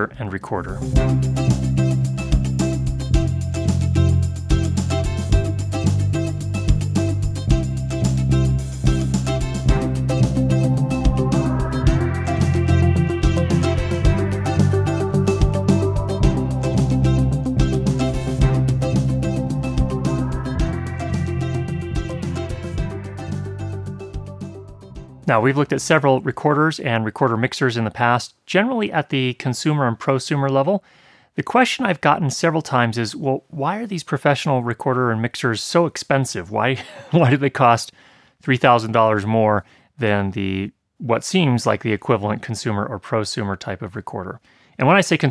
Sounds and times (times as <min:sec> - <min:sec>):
Speech: 0:00.0 - 0:00.9, 0:25.2 - 0:30.8, 0:31.4 - 0:45.3.